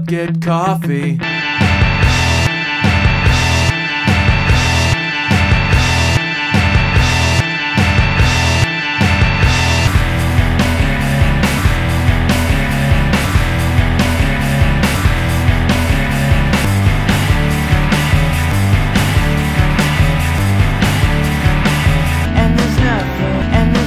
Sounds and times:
Music: 0:00.0 - 0:23.8.

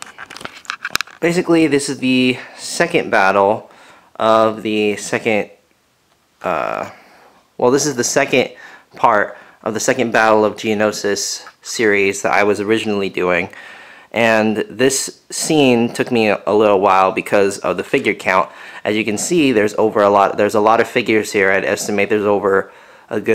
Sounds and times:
Speech: 0:01.2 - 0:05.6, 0:06.4 - 0:07.0, 0:07.6 - 0:23.3.

